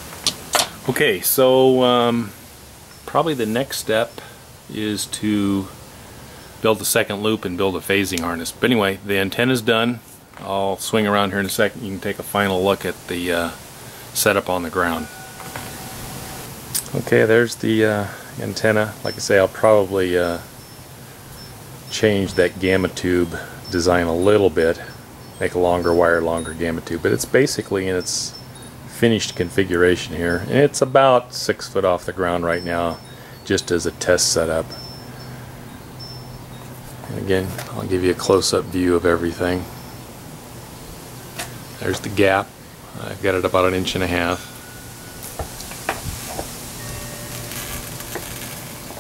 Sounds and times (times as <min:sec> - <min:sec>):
Speech: 0:00.8 - 0:02.4, 0:03.1 - 0:05.8, 0:06.6 - 0:13.6, 0:14.2 - 0:15.1, 0:16.8 - 0:20.5, 0:21.9 - 0:34.8, 0:37.1 - 0:39.7, 0:41.8 - 0:44.5.